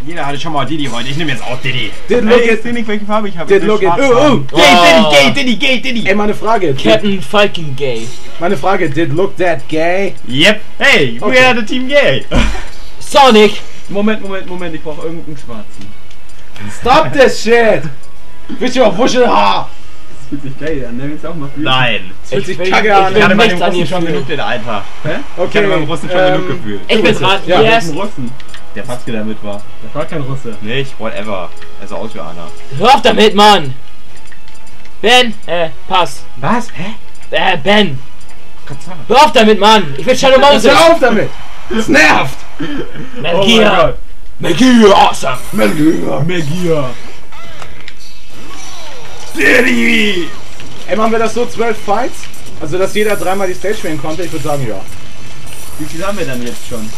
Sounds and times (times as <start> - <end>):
Speech: 0.0 - 12.3, 20.4 - 33.7, 43.2 - 47.0.